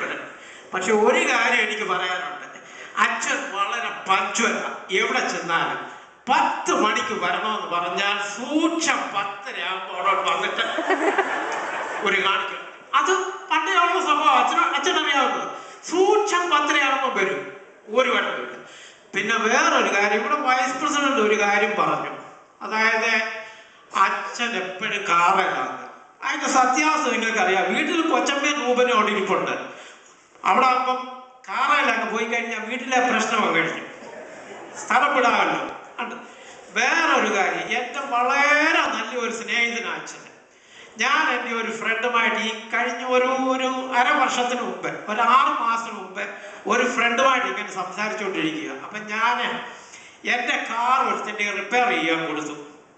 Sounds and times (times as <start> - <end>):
Male speech, man speaking: 0.0 - 10.7, 12.0 - 18.6, 19.2 - 23.4, 24.0 - 29.7, 30.4 - 40.3, 41.0 - 52.7
Narration, monologue: 0.0 - 52.9.